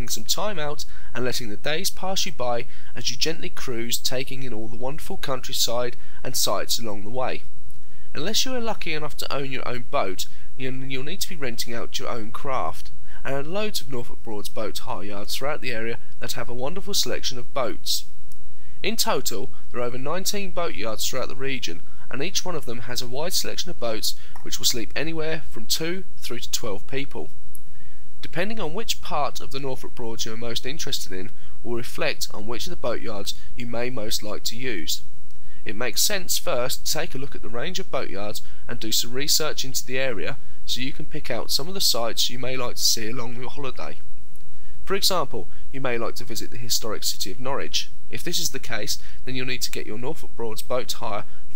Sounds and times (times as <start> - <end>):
Speech: 0.0 - 7.5, 8.2 - 18.1, 18.8 - 27.3, 28.2 - 44.0, 44.9 - 51.5.